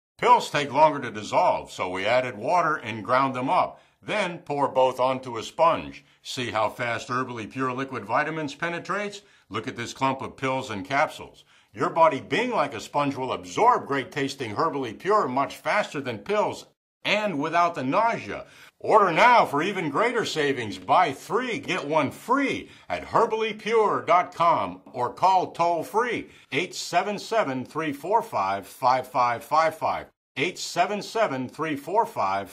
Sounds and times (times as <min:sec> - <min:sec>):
Speech: 0:00.2 - 0:32.5.